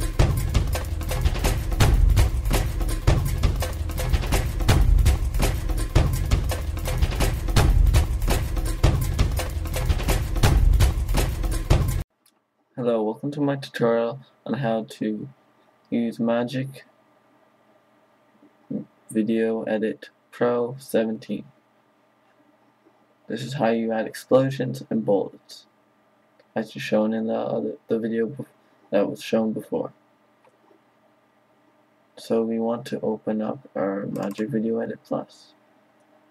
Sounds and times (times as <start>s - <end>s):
Speech: 12.8s - 16.9s, 18.7s - 21.5s, 23.3s - 25.7s, 26.6s - 30.0s, 32.2s - 35.6s.